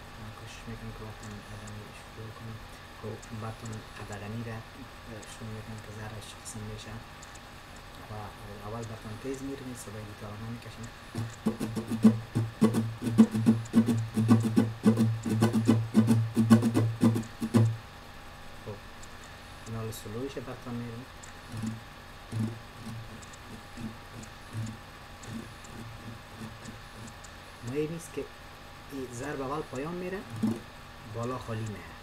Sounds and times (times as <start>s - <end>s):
Speech: 0.2s - 7.1s, 8.0s - 10.9s, 19.7s - 21.1s, 27.6s - 28.3s, 28.9s - 30.3s, 31.1s - 32.0s
Guitar: 9.8s - 17.8s, 20.8s - 28.0s, 29.0s - 31.7s.